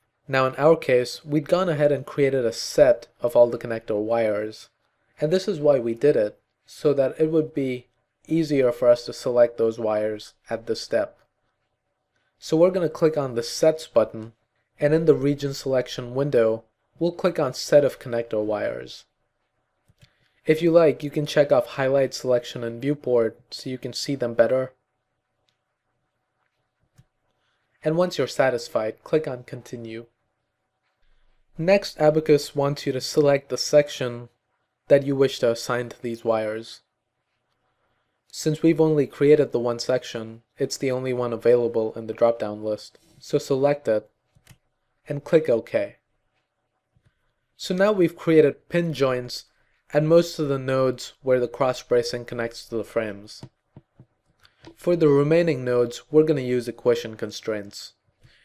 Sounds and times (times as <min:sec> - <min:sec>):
Speech: 0:00.3 - 0:11.2, 0:12.4 - 0:19.1, 0:20.5 - 0:24.8, 0:27.8 - 0:30.1, 0:31.6 - 0:36.9, 0:38.3 - 0:44.1, 0:45.1 - 0:46.0, 0:47.6 - 0:53.5, 0:54.7 - 0:58.0.